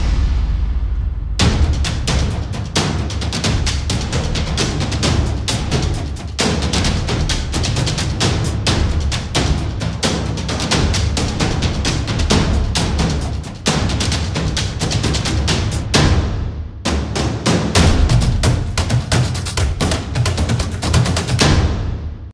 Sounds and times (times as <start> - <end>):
Music: 0.0 - 22.3.